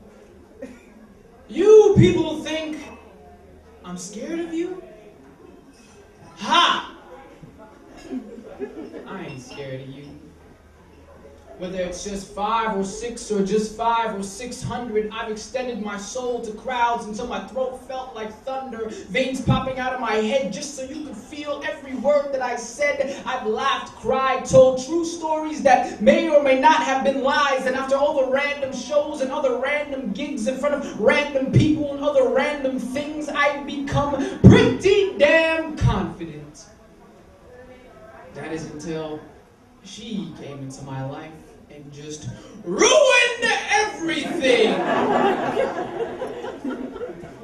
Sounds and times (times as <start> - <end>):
Speech: 1.4 - 5.6, 6.2 - 10.3, 11.1 - 45.2.